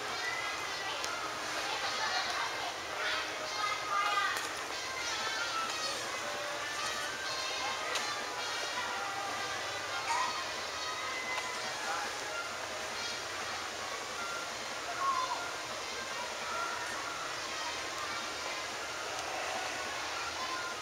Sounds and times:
Speech: 0.0s - 14.1s, 14.7s - 20.8s
Music: 0.0s - 20.8s.

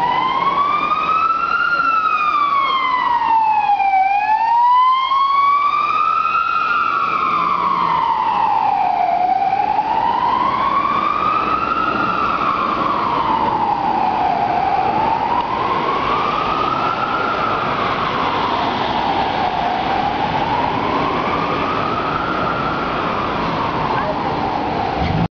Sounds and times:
Police car (siren): 0.0s - 25.3s.

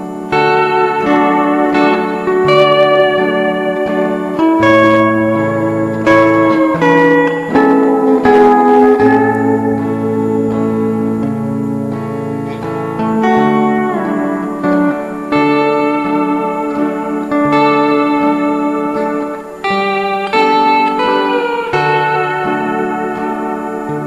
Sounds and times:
Guitar: 0.0s - 24.0s.

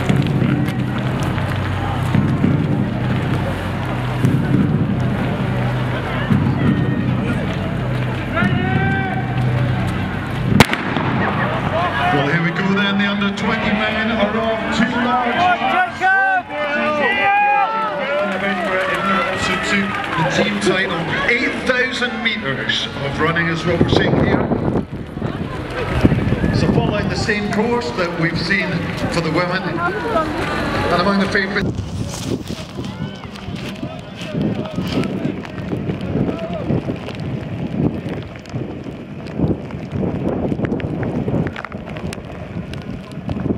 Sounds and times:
Outside, urban or manmade: 0.0s - 43.5s
Run: 0.0s - 43.5s.

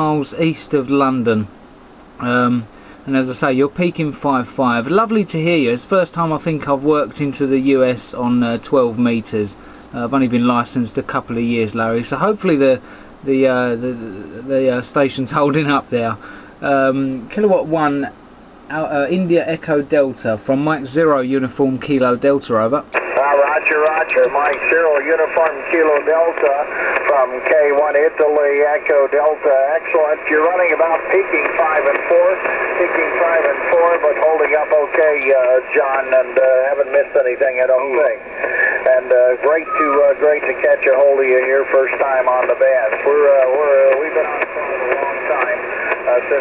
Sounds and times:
Speech: 0.0s - 1.5s, 2.2s - 46.4s.

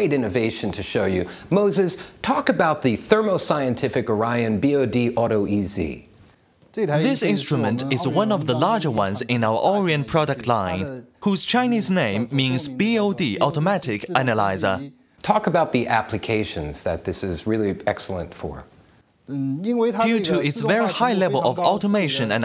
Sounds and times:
Speech: 0.0s - 6.1s, 6.7s - 18.7s, 19.3s - 22.4s.

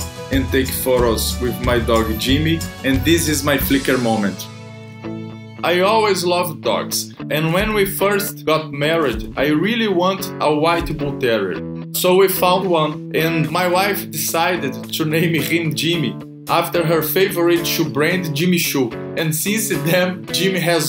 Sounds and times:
Speech: 0.0s - 4.5s, 5.6s - 20.8s
Music: 0.0s - 20.8s.

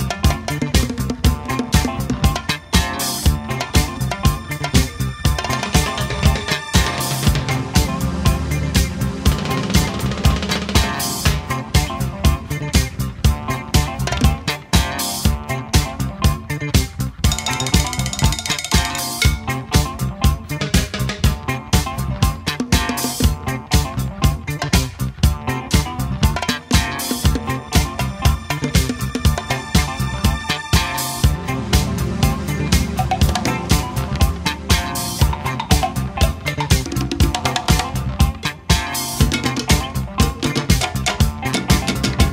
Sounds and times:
Funk: 0.0s - 42.3s.

